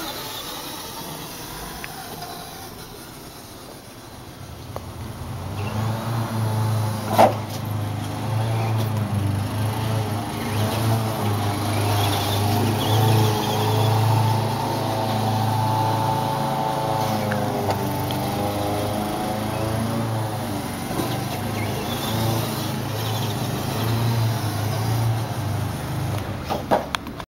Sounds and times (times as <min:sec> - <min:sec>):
Truck: 0:00.0 - 0:27.2.